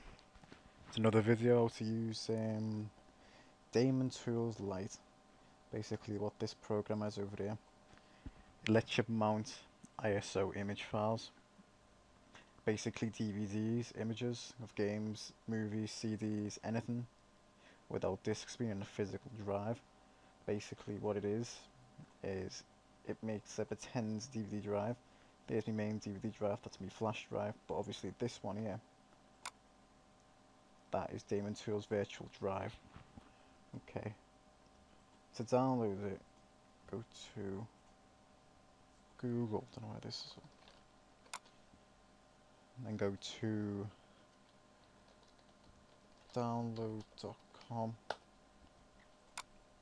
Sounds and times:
Speech: 0:00.9 - 0:03.0, 0:03.7 - 0:05.0, 0:05.7 - 0:07.6, 0:08.6 - 0:11.4, 0:12.6 - 0:17.1, 0:17.9 - 0:19.8, 0:20.5 - 0:28.8, 0:30.9 - 0:32.8, 0:33.7 - 0:34.2, 0:35.3 - 0:36.2, 0:36.9 - 0:37.7, 0:39.2 - 0:40.5, 0:42.8 - 0:44.0, 0:46.3 - 0:48.0.

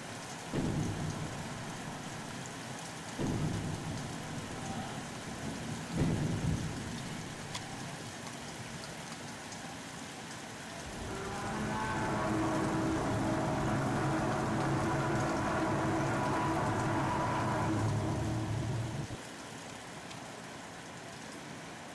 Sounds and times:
Rain: 0:00.0 - 0:21.9.

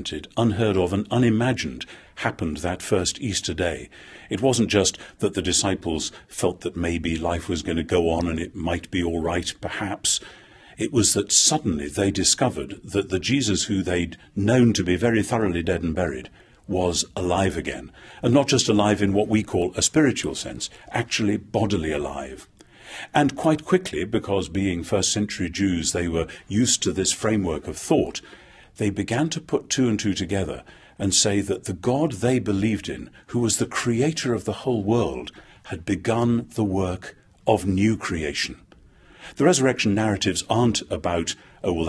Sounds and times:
Speech: 0:00.0 - 0:10.2, 0:10.8 - 0:22.5, 0:23.1 - 0:28.2, 0:28.8 - 0:38.7, 0:39.4 - 0:41.8.

